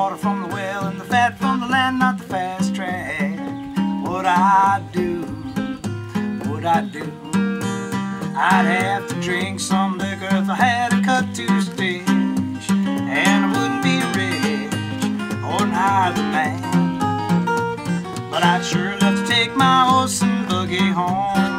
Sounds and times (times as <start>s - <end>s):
Music: 0.0s - 21.5s.